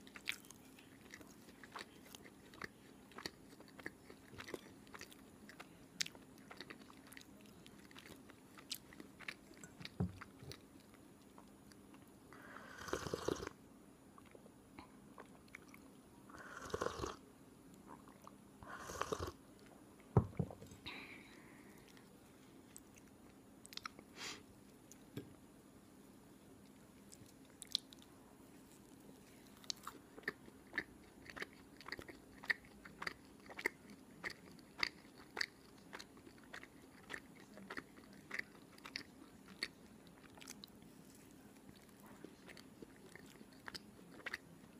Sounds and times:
Chewing, mastication: 0:00.0 - 0:13.6, 0:14.2 - 0:20.5, 0:21.2 - 0:25.2, 0:26.6 - 0:44.7.

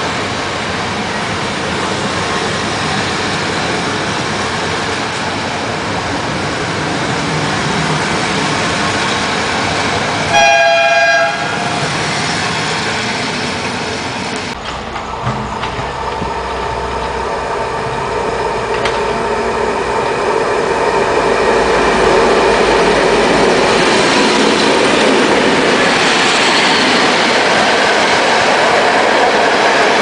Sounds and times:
Railroad car, train wagon: 0:00.0 - 0:30.0
Train: 0:00.0 - 0:30.0.

